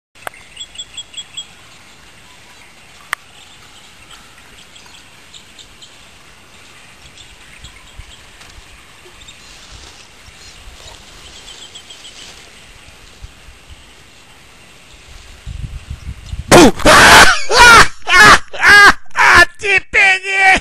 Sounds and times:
Outside, rural or natural: 0:00.1 - 0:20.6
Bird: 0:00.2 - 0:15.2.

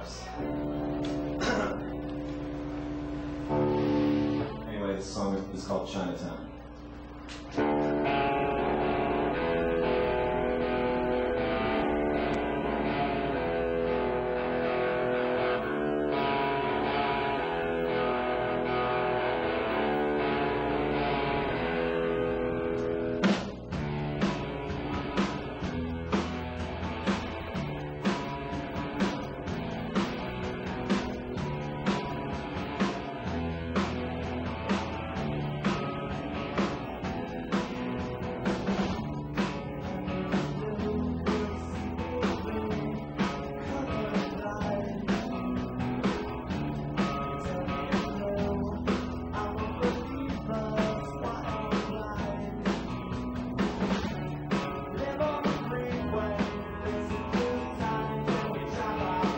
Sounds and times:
Speech: 0:00.0 - 0:00.4, 0:04.6 - 0:06.6
Music: 0:00.0 - 0:59.3.

